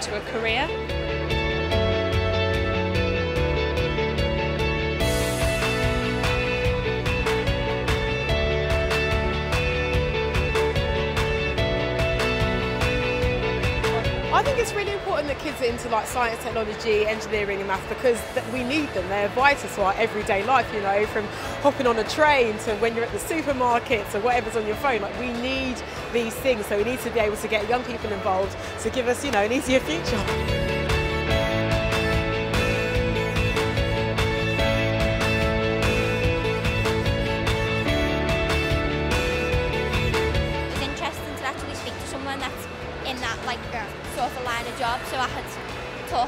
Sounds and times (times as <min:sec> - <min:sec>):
Music: 0:00.0 - 0:46.2.